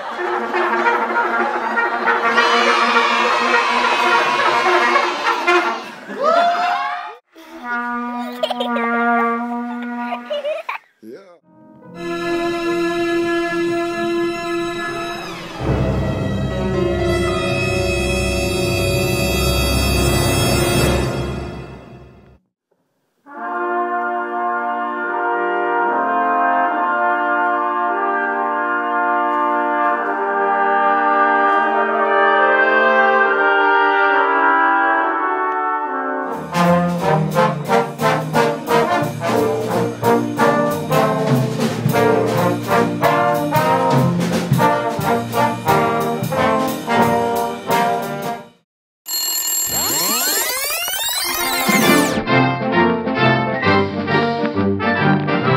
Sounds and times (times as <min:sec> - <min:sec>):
Trombone: 0:00.0 - 0:05.9, 0:07.6 - 0:10.4, 0:11.9 - 0:22.2, 0:23.3 - 0:48.6
Trumpet: 0:00.0 - 0:06.0, 0:07.5 - 0:10.4, 0:11.9 - 0:22.2, 0:23.2 - 0:55.5.